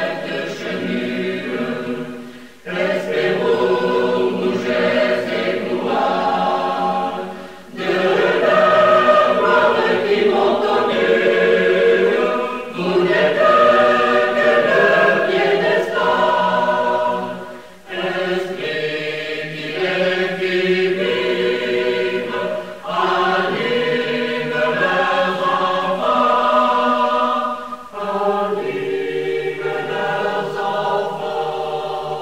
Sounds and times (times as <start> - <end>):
Mantra: 0.0 - 32.2.